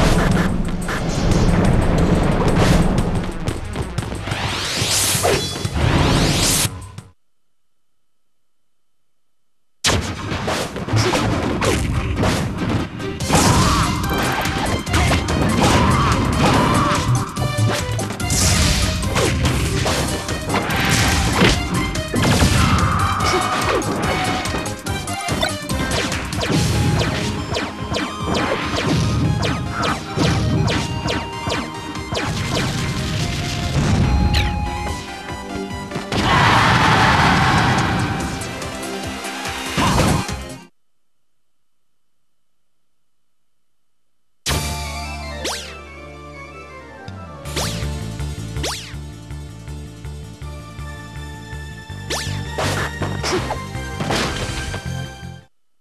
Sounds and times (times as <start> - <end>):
Whack, thwack: 9.9 - 13.8, 18.3 - 23.8, 52.6 - 54.8.